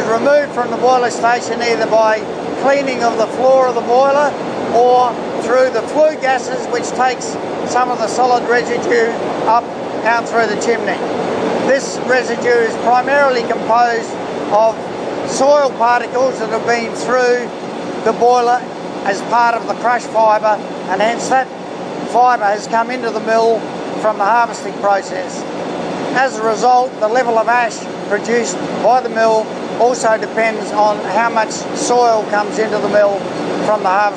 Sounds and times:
Speech: 0.0s - 11.0s, 11.6s - 21.5s, 22.1s - 25.5s, 26.2s - 34.1s.

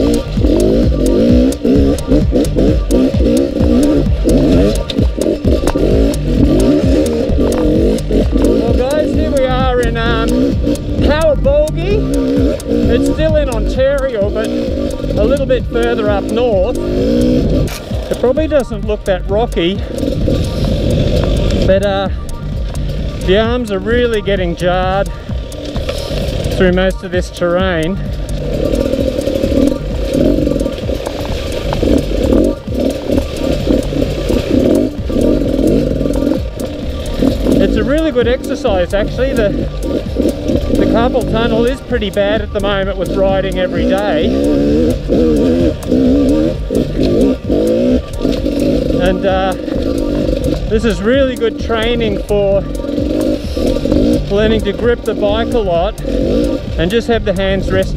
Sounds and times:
Music: 0.0s - 57.9s
Speech: 8.6s - 10.4s, 11.0s - 12.1s, 12.9s - 16.8s, 18.2s - 19.8s, 21.6s - 22.2s, 23.2s - 25.1s, 26.6s - 28.0s, 37.6s - 39.7s, 40.8s - 44.4s, 49.0s - 49.6s, 50.7s - 52.8s, 54.2s - 56.0s, 56.8s - 57.9s.

